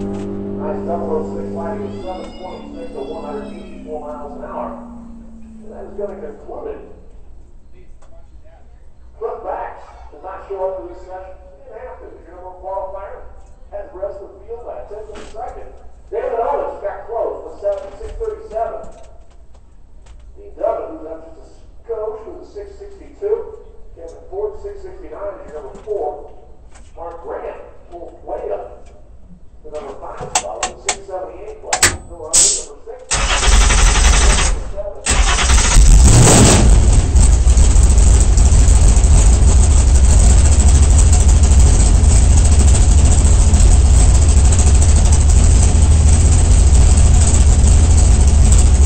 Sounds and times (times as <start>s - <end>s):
Car: 0.0s - 9.0s, 31.8s - 48.8s
Speech: 0.6s - 4.9s, 5.5s - 7.1s, 7.7s - 19.1s, 20.4s - 26.4s, 27.0s - 29.0s, 29.6s - 33.2s, 34.3s - 35.2s.